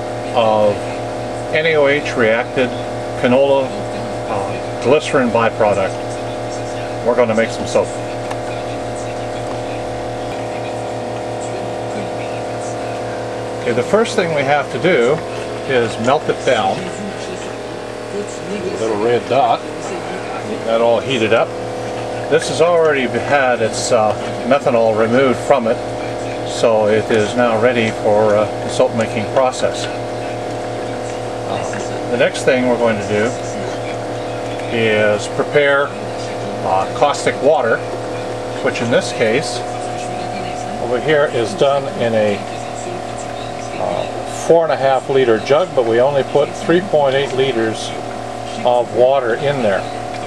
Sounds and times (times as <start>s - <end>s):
Speech: 0.2s - 50.2s.